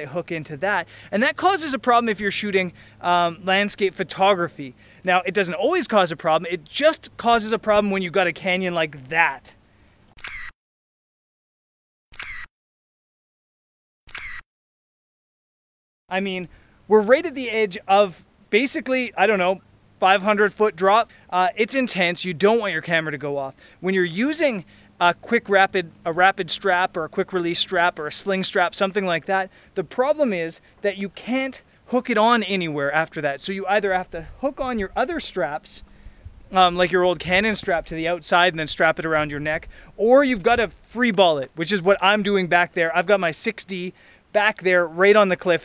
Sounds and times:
Speech: 0:00.0 - 0:09.6, 0:16.1 - 0:35.8, 0:36.5 - 0:45.6
Outside, rural or natural: 0:00.0 - 0:10.6, 0:12.1 - 0:12.5, 0:14.1 - 0:14.5, 0:16.1 - 0:45.6
Single-lens reflex camera: 0:10.2 - 0:10.6, 0:12.1 - 0:12.5, 0:14.1 - 0:14.5.

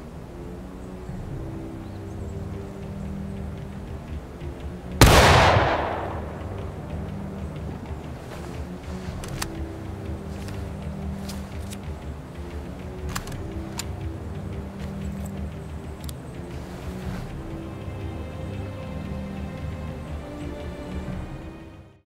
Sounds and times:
Music: 0:00.0 - 0:22.0.

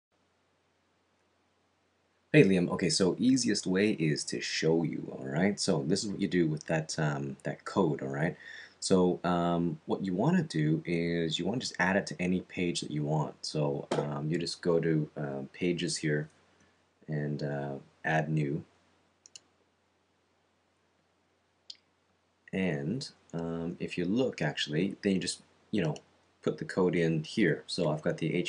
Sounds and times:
Narration, monologue: 0:02.3 - 0:28.4.

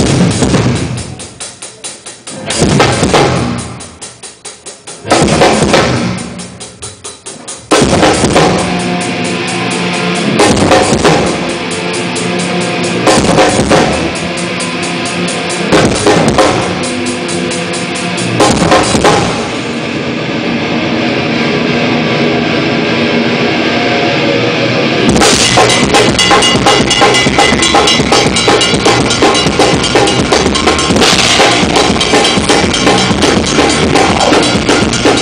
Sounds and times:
Music: 0:00.0 - 0:35.2.

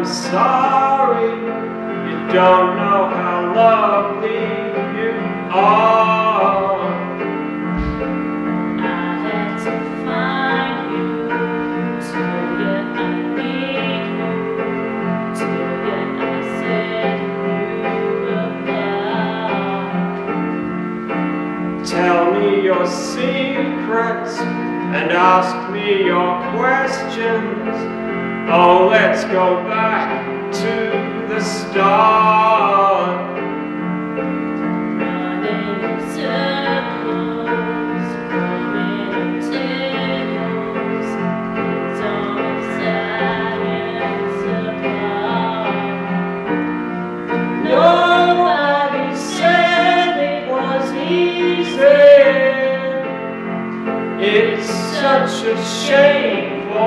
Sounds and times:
Male singing: 0:00.0 - 0:07.9, 0:08.8 - 0:14.6, 0:15.3 - 0:20.0, 0:21.8 - 0:33.5, 0:35.0 - 0:41.3, 0:41.9 - 0:46.1, 0:47.6 - 0:53.1, 0:54.2 - 0:56.8
Music: 0:00.0 - 0:56.8
Female singing: 0:08.8 - 0:14.5, 0:15.3 - 0:20.1, 0:35.0 - 0:41.3, 0:41.9 - 0:46.2, 0:54.7 - 0:56.2.

